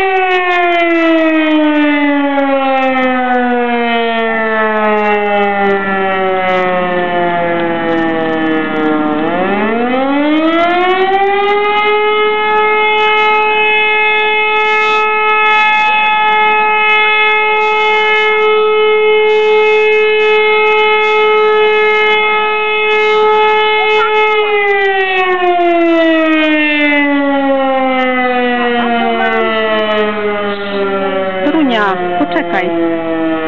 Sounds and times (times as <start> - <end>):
Siren: 0.0 - 33.4.